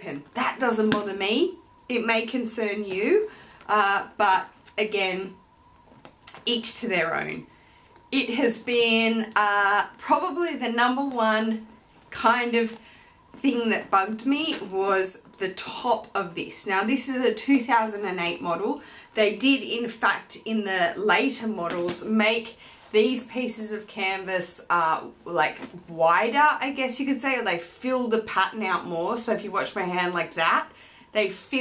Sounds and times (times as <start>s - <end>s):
Speech: 0.0s - 5.4s, 6.3s - 7.5s, 8.2s - 11.6s, 12.2s - 12.8s, 13.4s - 31.6s.